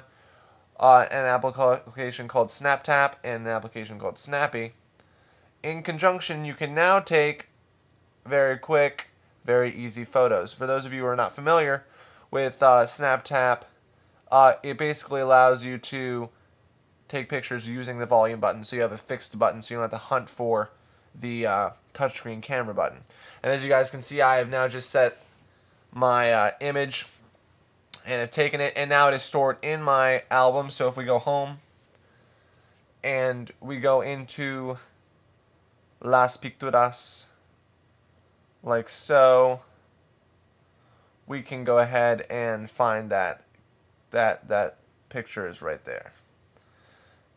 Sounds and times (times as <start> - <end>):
Speech: 0.8 - 4.8, 5.6 - 7.5, 8.3 - 16.4, 17.1 - 25.2, 26.0 - 27.2, 28.0 - 31.6, 33.0 - 35.0, 36.0 - 37.4, 38.6 - 39.8, 41.3 - 43.5, 44.1 - 46.2.